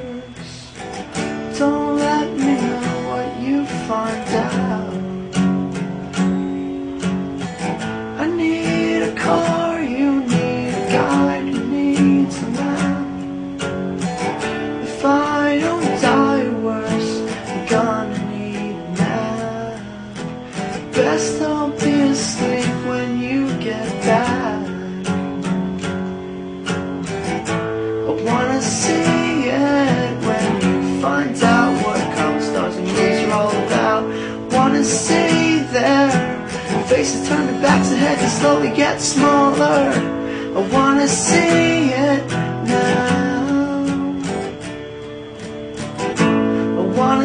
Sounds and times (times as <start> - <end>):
Music: 0.0 - 47.2.